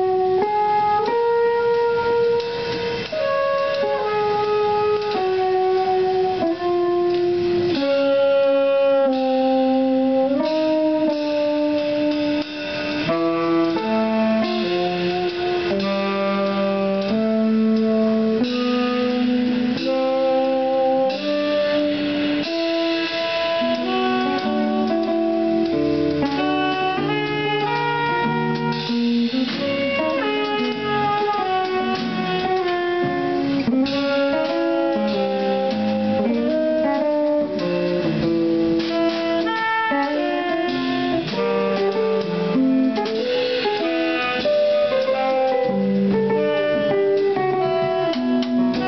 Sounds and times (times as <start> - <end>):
Independent music: 0.0 - 48.8.